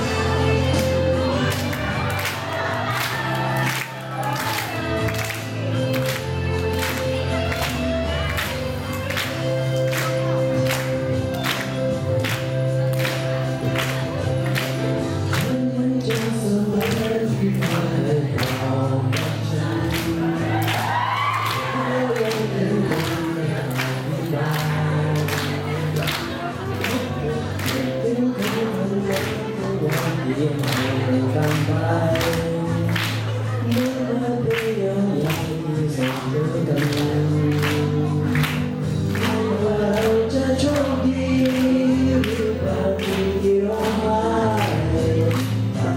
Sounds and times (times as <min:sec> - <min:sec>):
Male singing: 0:00.0 - 0:07.4, 0:15.0 - 0:45.9.